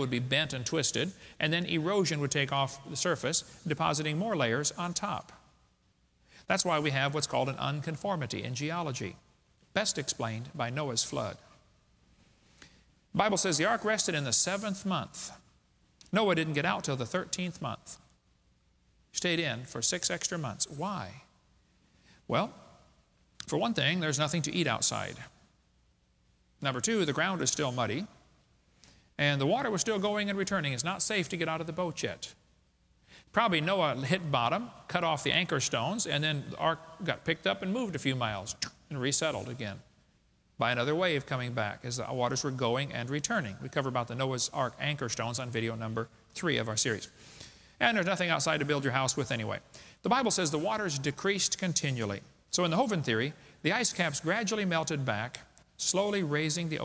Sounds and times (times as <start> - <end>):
Speech: 0.0 - 5.4, 6.5 - 11.5, 13.1 - 15.5, 16.1 - 18.0, 19.2 - 21.3, 22.3 - 22.6, 23.4 - 25.4, 26.6 - 28.2, 29.2 - 32.4, 33.3 - 39.9, 40.6 - 47.2, 47.8 - 56.8.